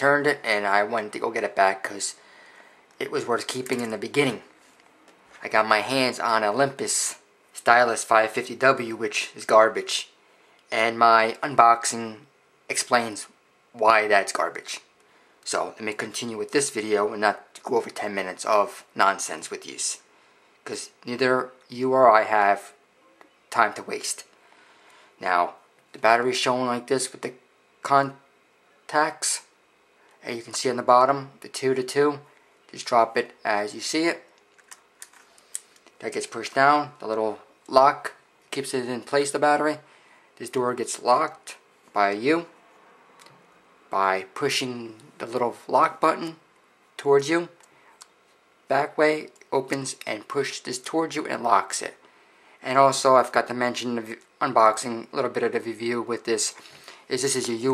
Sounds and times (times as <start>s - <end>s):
Speech: 0.0s - 2.2s, 3.0s - 4.5s, 5.4s - 24.3s, 25.2s - 28.2s, 28.8s - 29.6s, 30.2s - 34.3s, 36.0s - 42.6s, 43.9s - 46.4s, 47.0s - 47.6s, 48.7s - 52.0s, 52.6s - 57.7s.